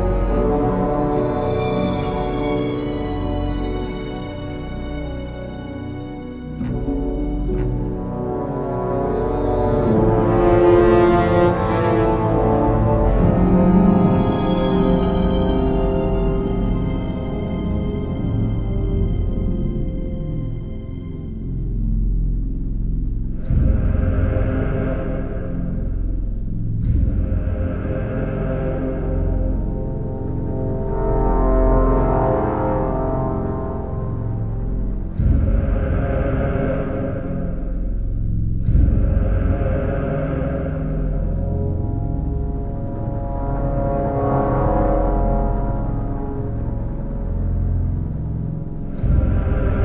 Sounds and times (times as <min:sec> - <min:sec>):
Scary music: 0:00.0 - 0:49.8.